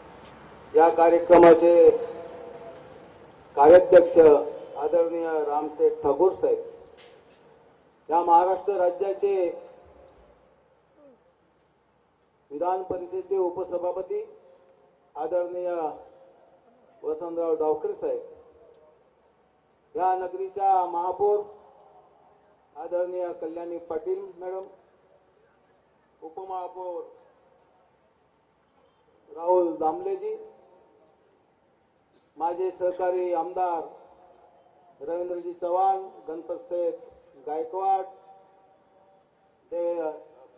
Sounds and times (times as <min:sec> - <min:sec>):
Narration, monologue: 0:00.0 - 0:40.5
Male speech, man speaking: 0:00.7 - 0:02.8, 0:03.6 - 0:06.7, 0:08.1 - 0:09.7, 0:12.5 - 0:14.4, 0:15.2 - 0:16.1, 0:16.9 - 0:18.4, 0:20.0 - 0:21.6, 0:22.8 - 0:24.8, 0:26.2 - 0:27.3, 0:29.3 - 0:30.6, 0:32.4 - 0:34.0, 0:35.0 - 0:38.2, 0:39.7 - 0:40.5.